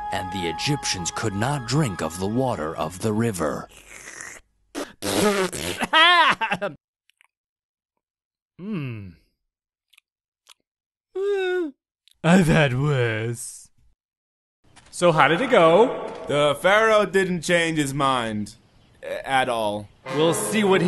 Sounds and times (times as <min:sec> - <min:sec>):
Speech: 0:15.0 - 0:20.8.